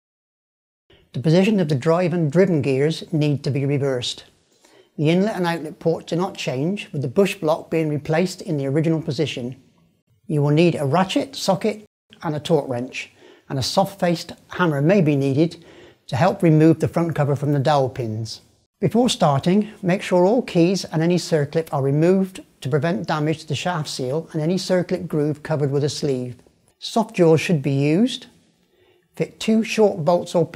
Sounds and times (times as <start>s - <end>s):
Speech: 1.1s - 4.4s, 5.0s - 9.7s, 10.3s - 28.4s, 29.2s - 30.5s.